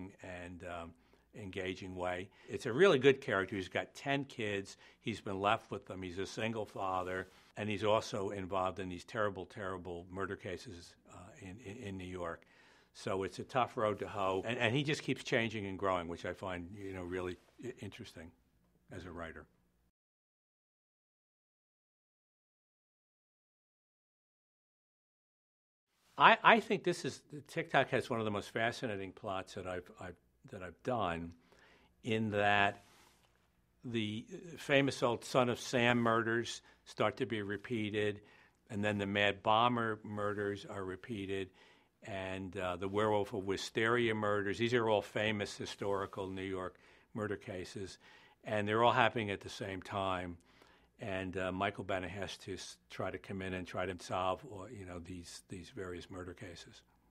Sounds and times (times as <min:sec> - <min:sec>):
Speech: 0:00.0 - 0:19.5, 0:26.2 - 0:31.4, 0:32.0 - 0:32.8, 0:33.8 - 0:50.4, 0:51.0 - 0:56.9.